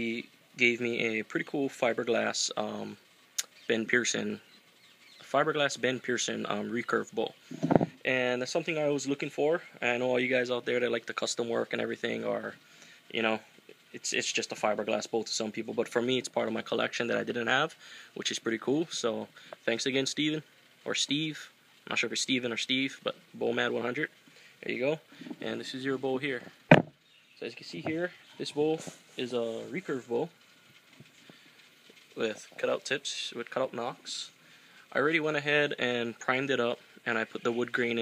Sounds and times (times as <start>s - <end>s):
Speech: 0.0s - 3.0s, 3.7s - 4.4s, 5.3s - 7.4s, 8.0s - 26.5s, 27.4s - 30.4s, 32.2s - 38.0s.